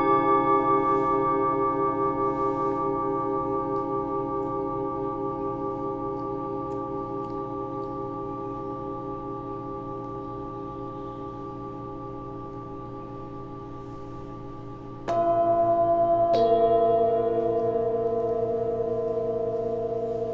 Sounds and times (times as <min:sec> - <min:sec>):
Music: 0:00.0 - 0:20.3.